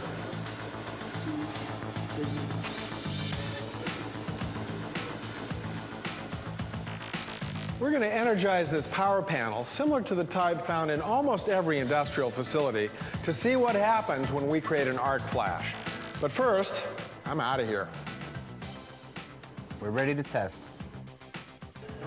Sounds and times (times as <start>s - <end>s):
Music: 0.0s - 22.0s
Speech: 7.8s - 17.9s, 19.8s - 20.7s.